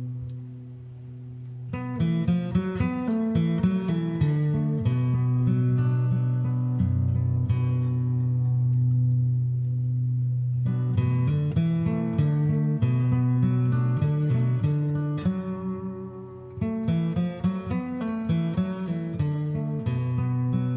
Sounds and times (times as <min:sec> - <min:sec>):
Music: 0:00.0 - 0:20.7.